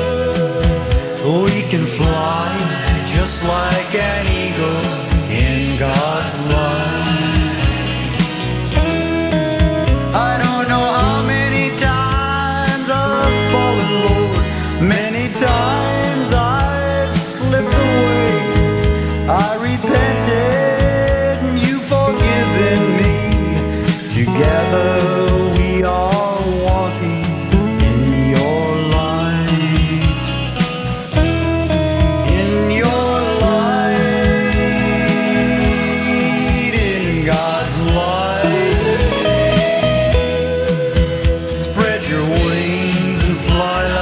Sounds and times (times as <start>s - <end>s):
Country: 0.0s - 44.0s
Jazz: 0.0s - 44.0s
Rhythm and blues: 0.0s - 44.0s.